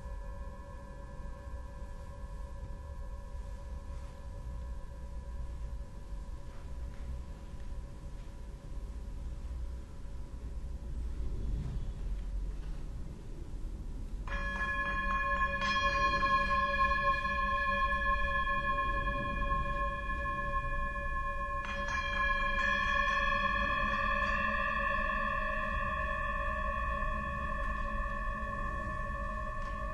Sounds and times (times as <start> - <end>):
Tubular bells: 14.3 - 29.9.